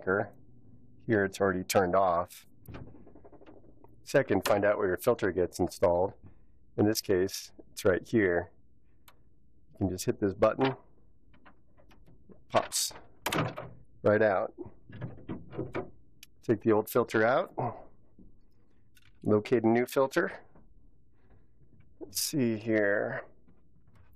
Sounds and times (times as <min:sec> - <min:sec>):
Speech: 0:00.0 - 0:00.4, 0:01.1 - 0:02.5, 0:04.1 - 0:06.2, 0:06.8 - 0:08.6, 0:09.8 - 0:10.8, 0:12.5 - 0:13.0, 0:14.0 - 0:14.7, 0:16.4 - 0:17.9, 0:19.2 - 0:20.5, 0:22.0 - 0:23.4.